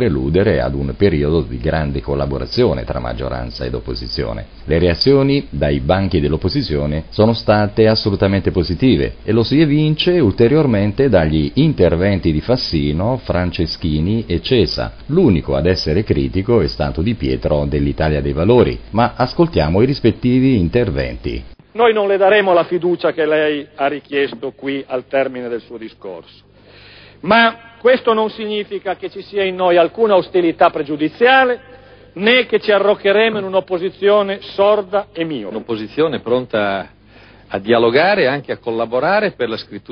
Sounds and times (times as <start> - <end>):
Speech: 0.0 - 26.4, 27.2 - 36.9, 37.5 - 39.9.